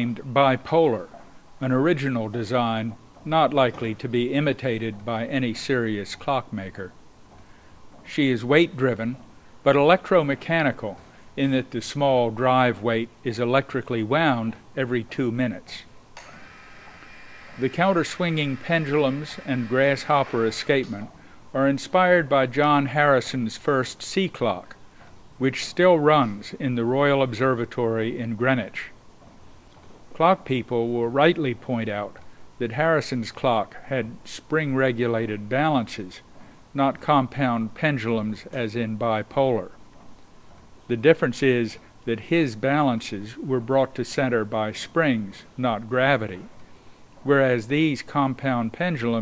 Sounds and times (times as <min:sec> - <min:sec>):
Speech: 0:00.0 - 0:07.0, 0:08.1 - 0:15.9, 0:17.6 - 0:24.8, 0:25.4 - 0:29.0, 0:30.2 - 0:39.8, 0:40.9 - 0:46.5, 0:47.2 - 0:49.2.